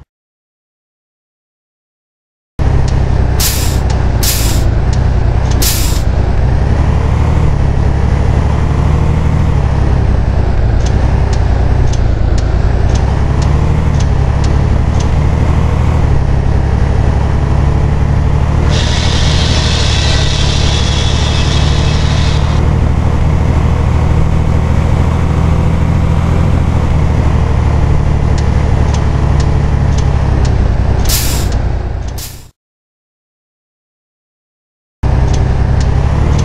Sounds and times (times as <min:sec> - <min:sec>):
Bus: 0:02.6 - 0:32.6, 0:35.0 - 0:36.4.